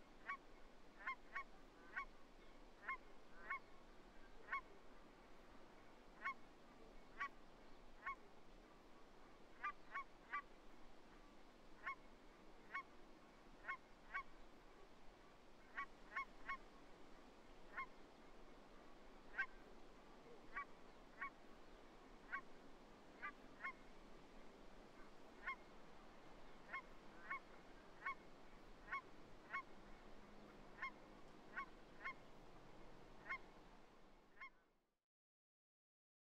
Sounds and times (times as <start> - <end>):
Honk: 1.0 - 2.1, 2.8 - 3.6, 4.4 - 4.7, 6.2 - 6.4, 8.0 - 8.2, 9.6 - 10.5, 12.7 - 12.9, 13.6 - 14.3, 15.7 - 16.6, 19.3 - 19.6, 20.5 - 21.4, 23.2 - 23.8, 25.0 - 25.6, 26.7 - 27.4, 28.0 - 28.2, 28.8 - 29.7, 30.8 - 32.2, 33.2 - 33.5, 34.4 - 34.6.